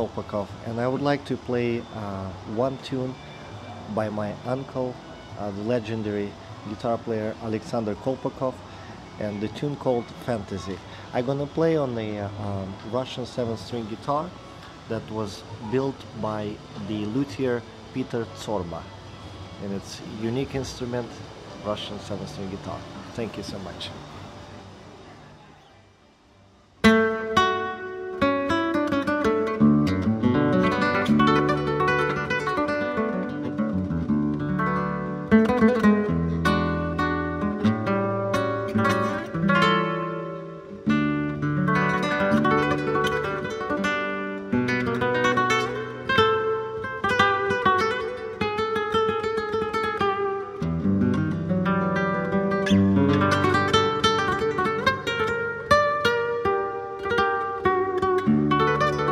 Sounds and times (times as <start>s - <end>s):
Acoustic guitar: 0.0s - 24.6s, 26.8s - 59.1s
Strum: 26.8s - 59.1s.